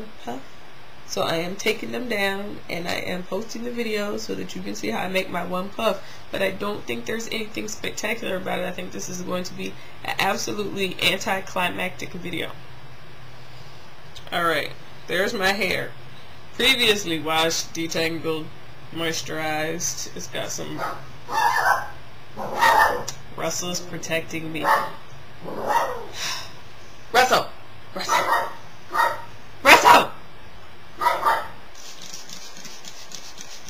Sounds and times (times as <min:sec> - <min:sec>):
Speech: 0:01.1 - 0:12.6, 0:14.2 - 0:16.0, 0:16.6 - 0:20.8, 0:23.4 - 0:24.8, 0:27.2 - 0:28.3.